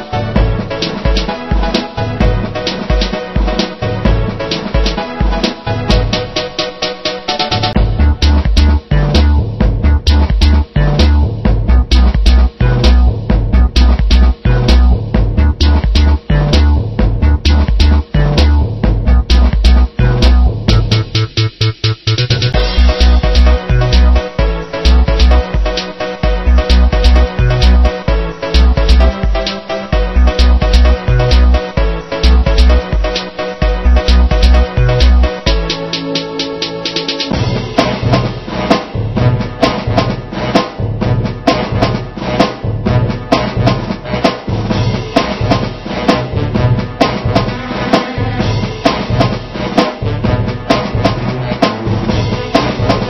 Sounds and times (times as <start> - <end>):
Video game music: 0.0 - 53.0.